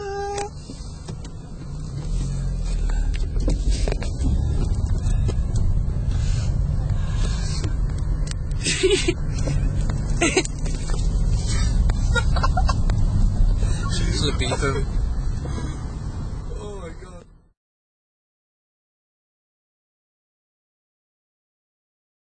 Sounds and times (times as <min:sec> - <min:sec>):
Speech: 0:16.5 - 0:17.4.